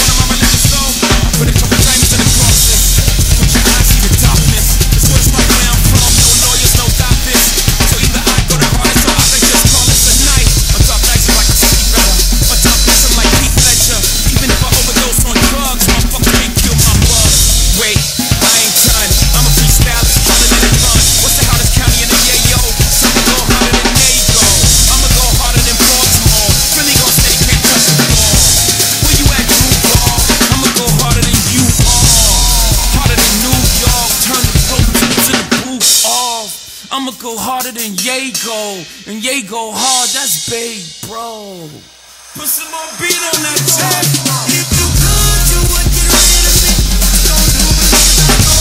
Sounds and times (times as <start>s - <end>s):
Bass drum: 0.0s - 35.4s, 42.7s - 48.6s
Drum kit: 0.0s - 48.6s
Drum roll: 0.0s - 48.6s.